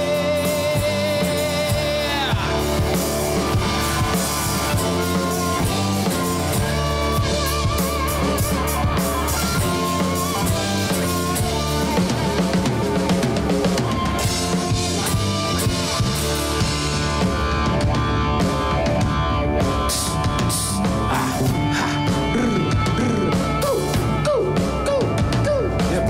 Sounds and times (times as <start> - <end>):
Singing: 0.0 - 2.9
Music: 0.0 - 26.1.